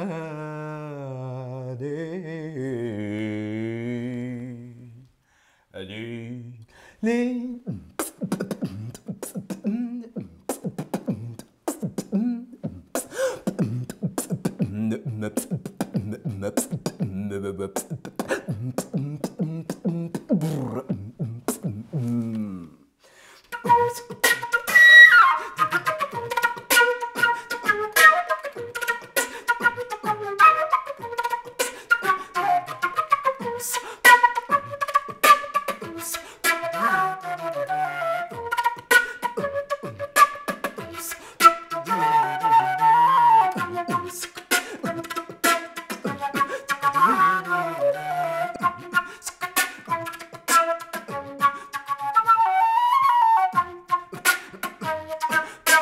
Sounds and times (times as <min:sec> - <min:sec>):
Flute: 0:23.5 - 0:55.8.